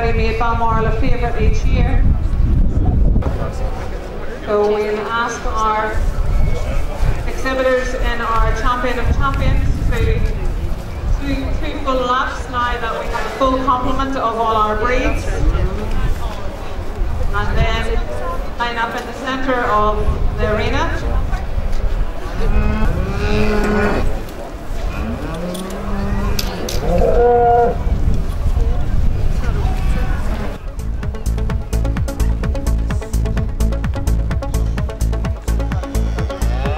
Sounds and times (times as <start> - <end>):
Speech: 2.8 - 10.4, 11.2 - 21.6.